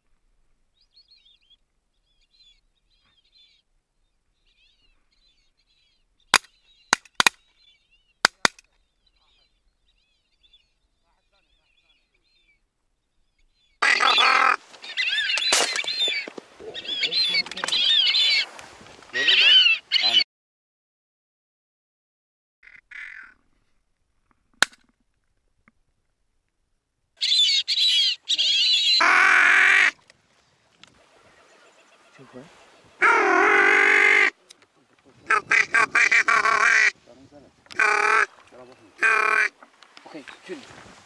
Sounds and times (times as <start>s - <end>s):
Bird: 0.8s - 20.2s, 27.2s - 30.0s, 30.9s - 33.3s.